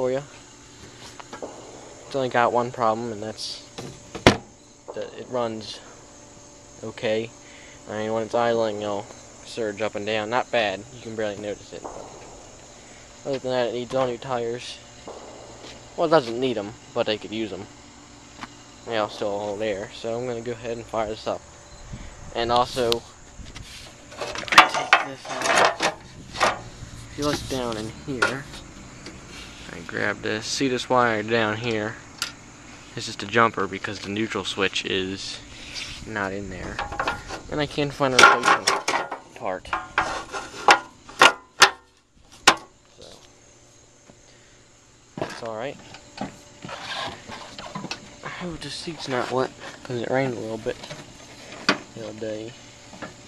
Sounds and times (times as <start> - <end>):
Speech: 0.0 - 0.3, 2.1 - 3.7, 4.9 - 5.9, 6.8 - 11.9, 13.2 - 14.8, 16.0 - 17.7, 18.8 - 21.4, 22.3 - 23.1, 24.7 - 25.7, 27.1 - 28.6, 29.7 - 32.0, 33.0 - 36.8, 37.5 - 39.8, 43.0 - 43.2, 45.2 - 45.8, 48.2 - 50.8, 51.9 - 52.6.